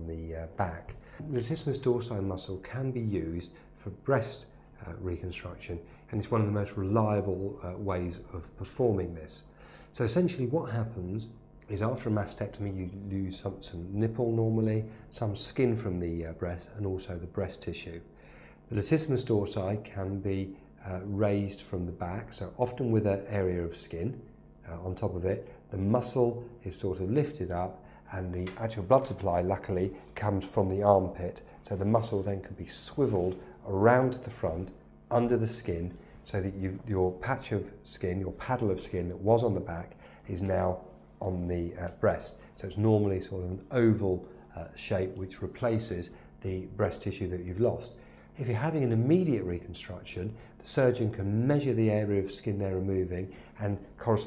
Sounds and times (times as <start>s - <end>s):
Speech: 0.0s - 54.2s.